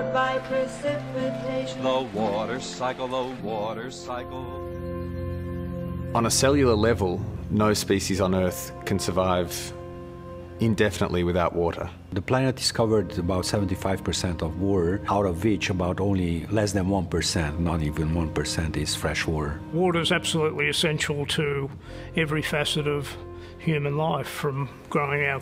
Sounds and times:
Music: 0.0s - 25.4s
Speech: 6.2s - 9.8s, 10.6s - 25.4s.

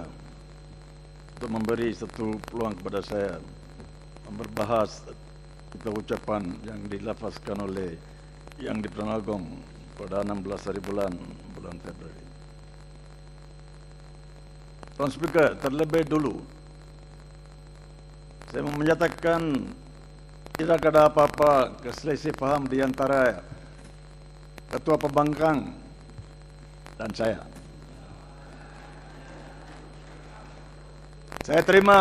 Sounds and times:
Narration, monologue: 0.0s - 28.0s, 30.9s - 32.0s
Male speech, man speaking: 1.4s - 3.5s, 4.3s - 5.2s, 5.8s - 8.0s, 8.6s - 12.2s, 15.0s - 16.5s, 18.5s - 19.8s, 20.6s - 23.5s, 24.7s - 25.8s, 27.0s - 27.6s, 31.5s - 32.0s.

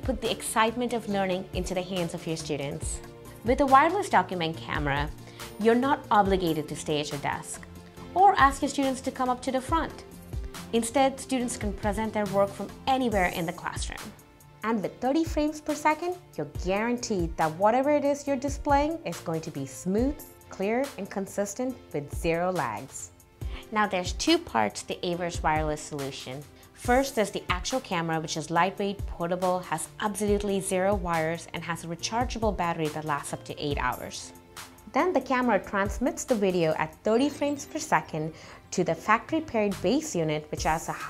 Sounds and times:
Speech: 0.0s - 7.6s, 8.2s - 10.0s, 10.7s - 34.3s, 34.9s - 41.0s
Music: 0.0s - 41.0s.

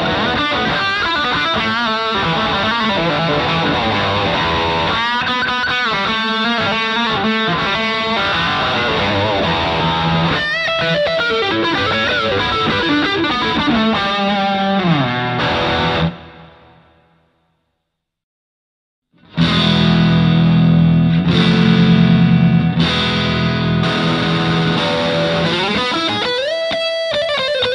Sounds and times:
Heavy metal: 0.0s - 16.2s, 19.2s - 26.7s
Electric guitar: 0.0s - 17.2s, 19.2s - 27.7s
Effects unit: 0.0s - 17.8s, 19.1s - 27.7s
Distortion: 0.0s - 18.2s, 19.1s - 27.7s.

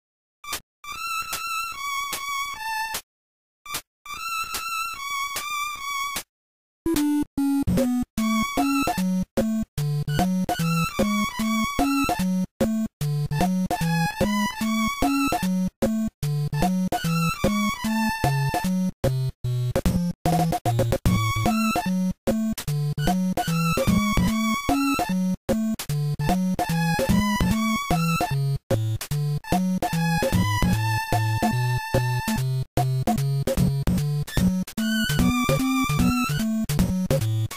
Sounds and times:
Music: 0.4s - 3.1s, 3.7s - 6.3s, 6.9s - 37.5s.

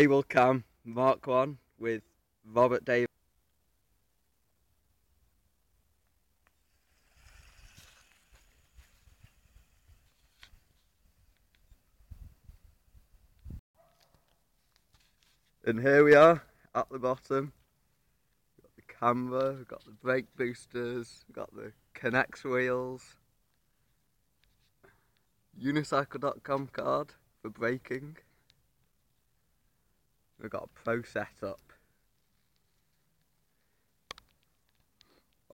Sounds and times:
Speech: 0.0s - 3.1s, 15.6s - 17.6s, 18.6s - 23.2s, 25.6s - 28.3s, 30.4s - 31.8s.

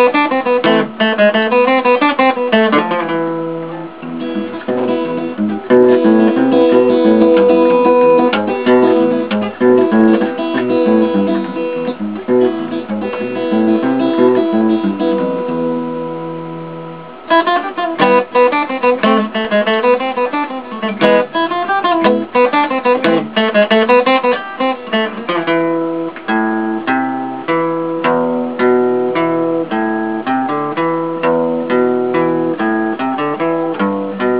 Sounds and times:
Strum: 0.0s - 34.3s.

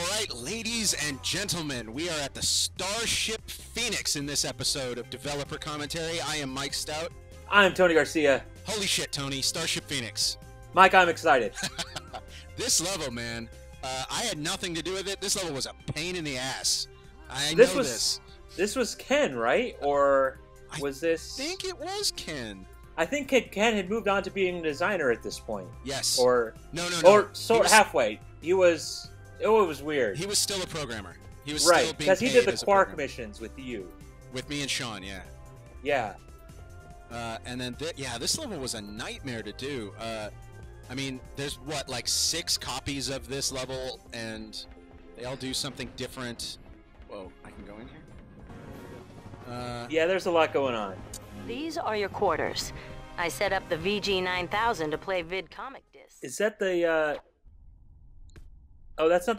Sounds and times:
Speech: 0.0s - 35.2s, 35.9s - 36.2s, 37.1s - 40.3s, 40.9s - 44.6s, 45.2s - 48.0s, 49.5s - 57.2s, 59.0s - 59.3s
Music: 0.0s - 57.2s, 59.0s - 59.3s.

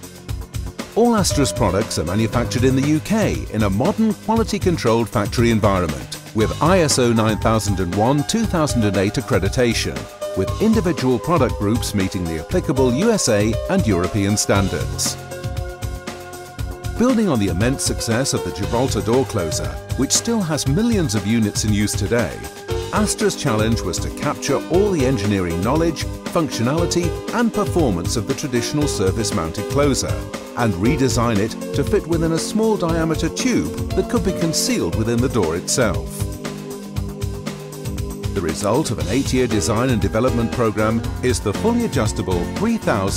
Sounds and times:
Music: 0.0s - 43.1s
Speech: 1.0s - 15.2s, 17.0s - 36.3s, 38.4s - 43.1s.

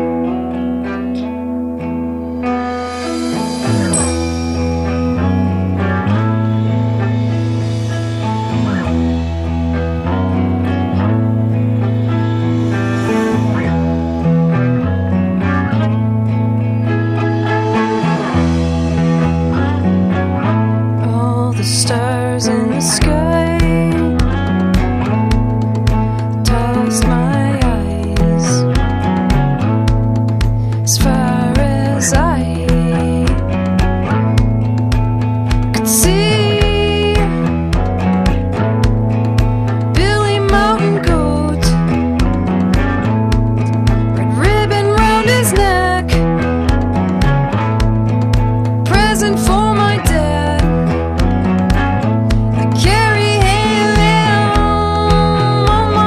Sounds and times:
Music: 0.0s - 56.0s.

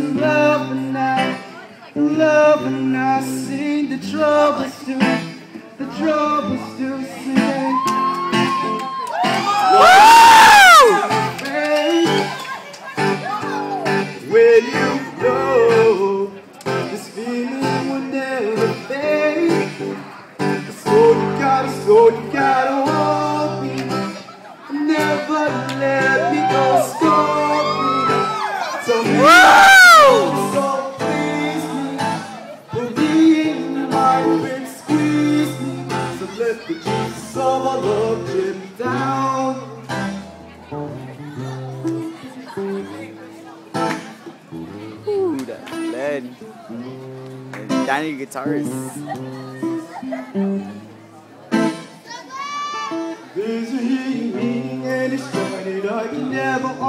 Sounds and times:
Male singing: 0.0s - 8.0s, 10.7s - 12.4s, 14.2s - 19.9s, 20.7s - 39.8s, 53.3s - 56.8s
Music: 0.0s - 56.8s.

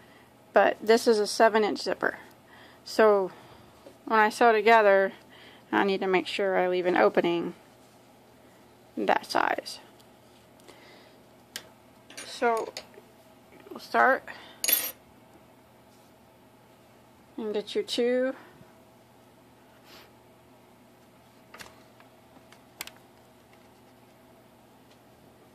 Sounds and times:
Inside, small room: 0.0s - 25.5s
Speech: 0.6s - 2.3s, 2.9s - 3.4s, 4.1s - 7.6s, 9.0s - 9.9s, 12.2s - 12.8s, 13.6s - 14.3s, 17.4s - 18.5s.

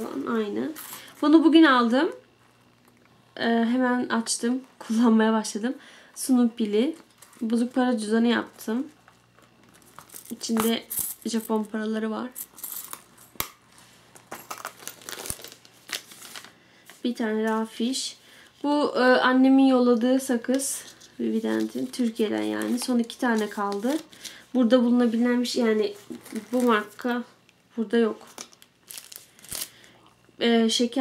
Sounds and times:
Inside, small room: 0.0s - 31.0s
Speech: 17.0s - 24.0s, 24.6s - 28.3s, 30.4s - 31.0s.

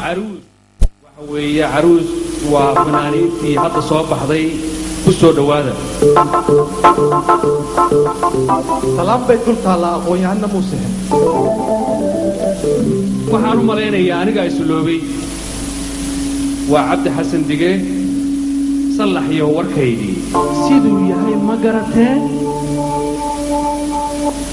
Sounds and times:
Organ: 1.6s - 24.5s.

